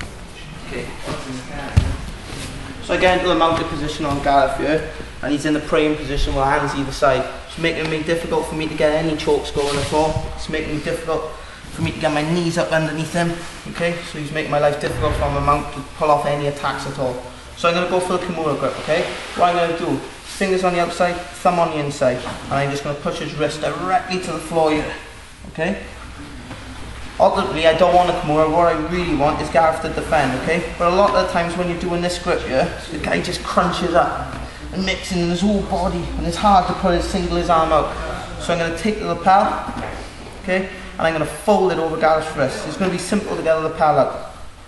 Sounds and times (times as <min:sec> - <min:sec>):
Speech: 0:02.8 - 0:26.0, 0:27.2 - 0:39.8, 0:40.4 - 0:44.4.